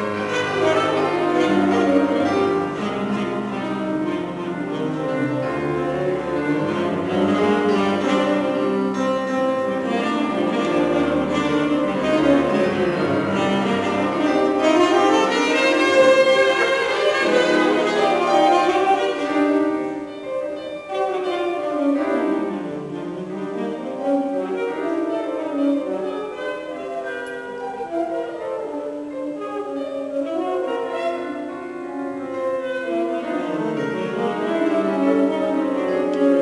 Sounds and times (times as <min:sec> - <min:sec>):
Classical music: 0:00.0 - 0:36.4.